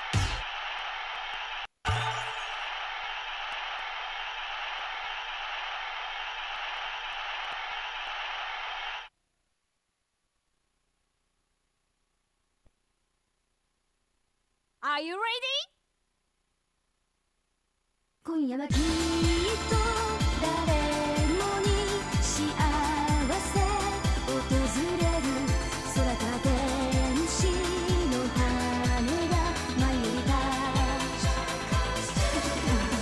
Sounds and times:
Pop music: 18.7s - 33.0s.

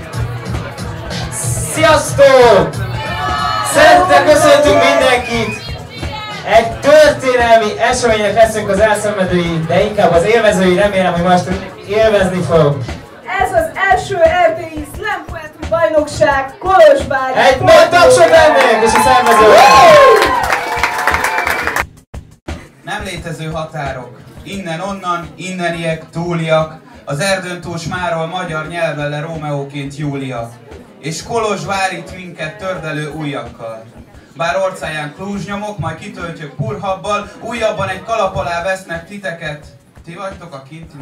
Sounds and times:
Speech: 3.7s - 19.7s, 22.8s - 41.0s.

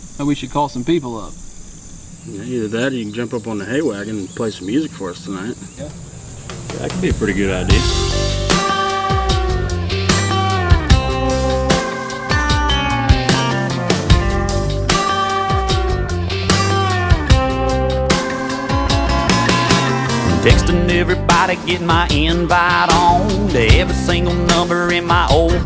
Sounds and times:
Rhythm and blues: 6.8s - 25.6s.

